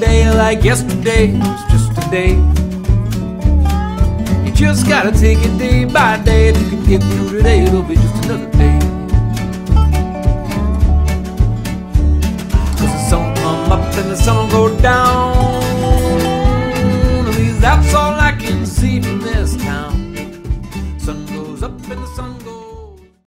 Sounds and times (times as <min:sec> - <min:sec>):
Music: 0:00.0 - 0:23.3.